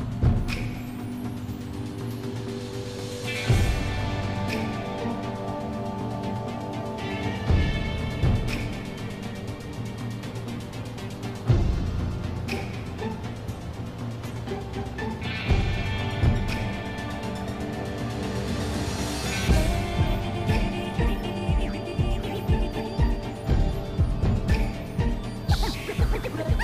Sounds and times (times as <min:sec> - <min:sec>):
Music: 0:00.0 - 0:26.6.